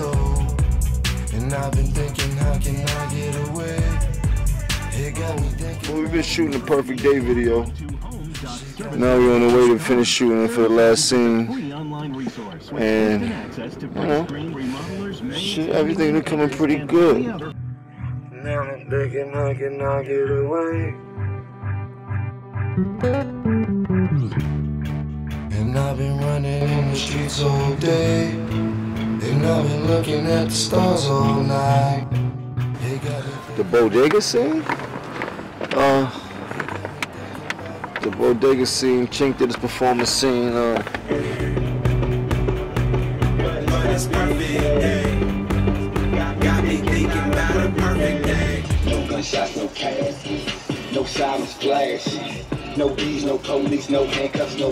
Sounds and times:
Music: 0.0 - 11.3, 16.0 - 37.4, 38.2 - 54.7.

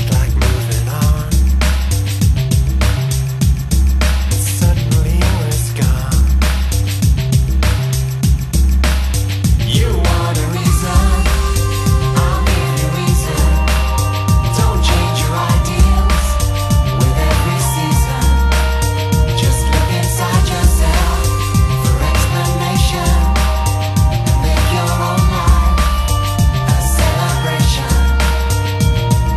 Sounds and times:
Jingle (music): 0.0 - 29.3.

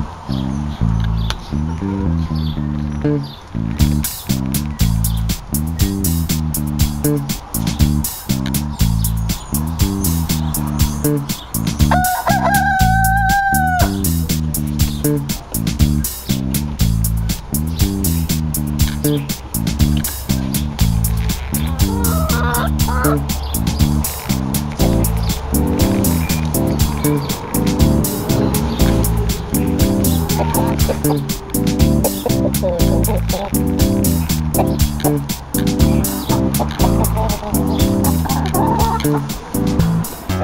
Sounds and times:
Chicken, rooster: 11.9 - 14.0, 21.8 - 23.2, 30.2 - 31.3, 32.0 - 33.6, 36.3 - 39.3.

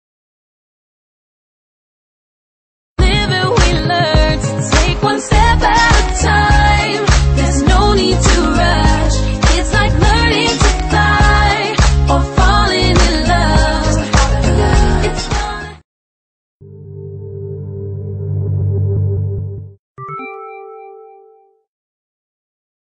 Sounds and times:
Music: 3.0 - 15.8, 16.8 - 21.7.

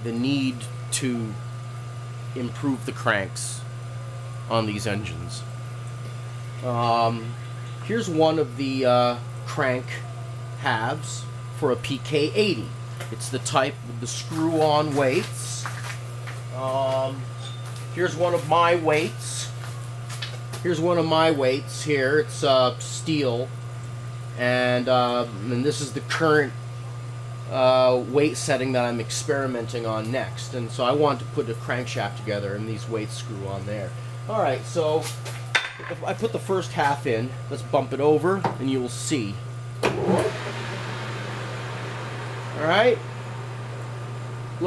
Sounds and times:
Speech: 0.0 - 1.4, 2.4 - 3.7, 4.5 - 5.6, 6.6 - 15.8, 16.5 - 17.3, 18.0 - 19.6, 20.6 - 23.6, 24.4 - 26.6, 27.5 - 35.2, 35.8 - 39.5, 42.5 - 43.1.

